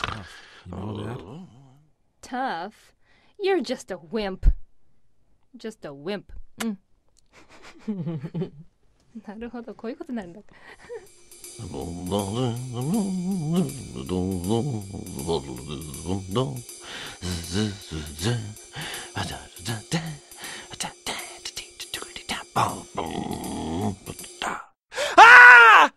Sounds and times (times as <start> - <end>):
Speech: 0.0 - 2.8, 3.4 - 4.4, 9.2 - 10.4, 11.6 - 16.6, 22.6 - 24.2
Music: 10.7 - 24.8.